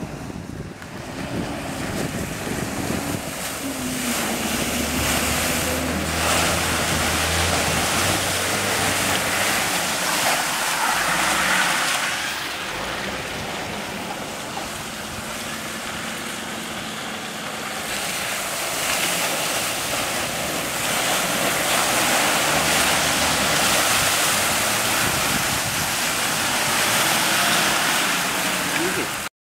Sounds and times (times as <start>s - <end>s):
Ocean: 0.0s - 29.3s
Speech: 28.7s - 29.2s.